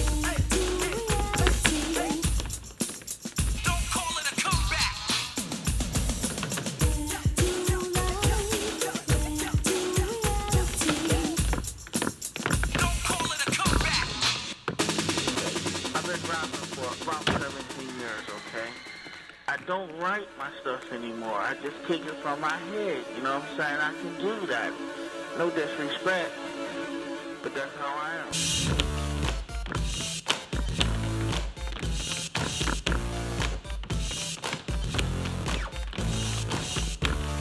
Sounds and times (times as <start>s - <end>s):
Music: 0.0s - 37.4s.